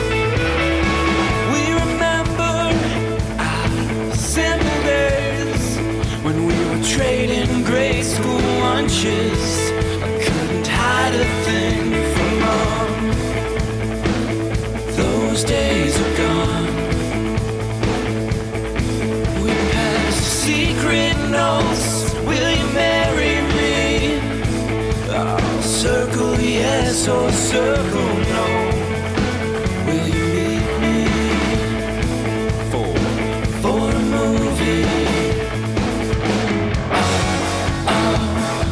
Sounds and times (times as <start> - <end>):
New-age music: 0.0 - 38.7.